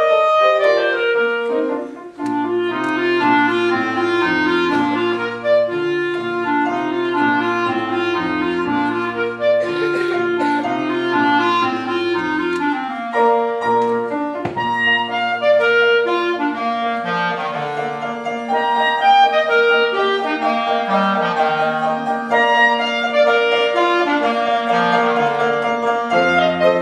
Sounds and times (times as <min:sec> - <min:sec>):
Clarinet: 0:00.0 - 0:26.8.